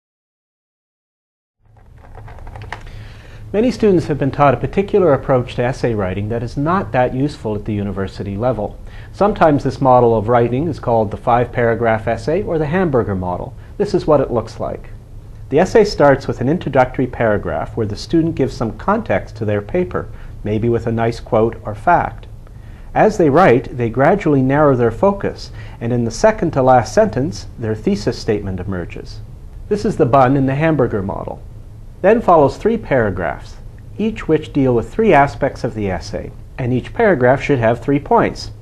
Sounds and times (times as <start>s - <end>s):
Speech: 3.5s - 22.3s, 22.9s - 31.4s, 32.0s - 38.6s.